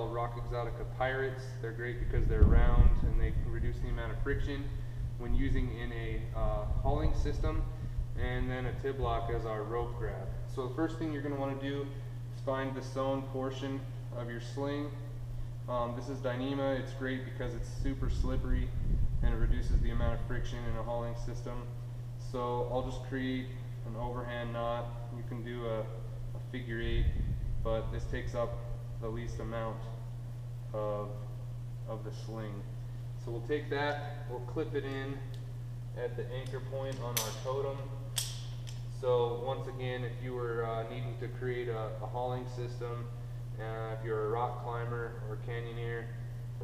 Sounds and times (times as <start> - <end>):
Speech: 0.0 - 15.1, 15.7 - 30.1, 30.7 - 35.4, 36.0 - 38.0, 38.9 - 46.6.